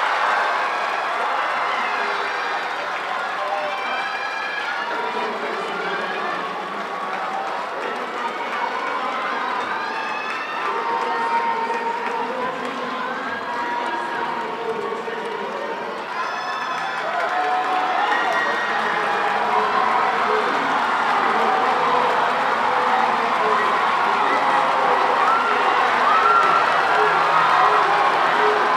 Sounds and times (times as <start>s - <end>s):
Run: 0.0s - 28.7s
Speech: 1.2s - 28.7s.